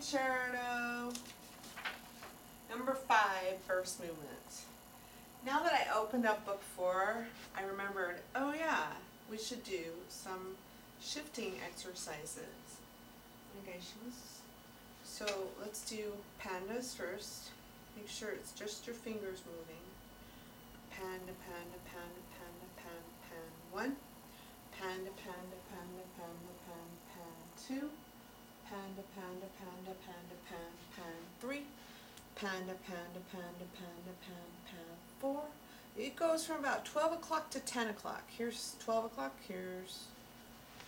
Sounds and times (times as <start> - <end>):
Speech: 0.0 - 1.2, 2.7 - 4.8, 5.4 - 12.9, 13.5 - 20.0, 20.9 - 24.1, 24.7 - 28.0, 28.6 - 31.8, 32.4 - 40.2.